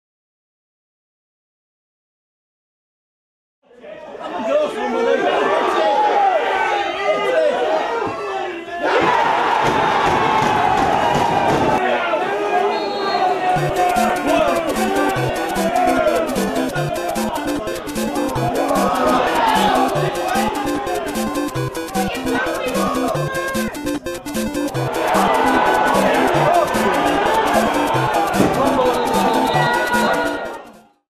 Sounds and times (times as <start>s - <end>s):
Music: 13.6s - 31.0s.